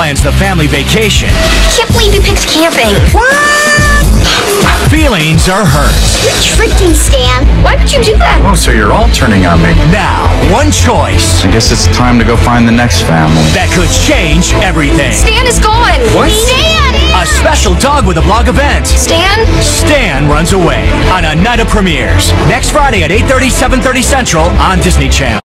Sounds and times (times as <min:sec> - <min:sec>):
Speech: 0:00.0 - 0:04.0, 0:04.7 - 0:25.4
Music: 0:00.0 - 0:25.4.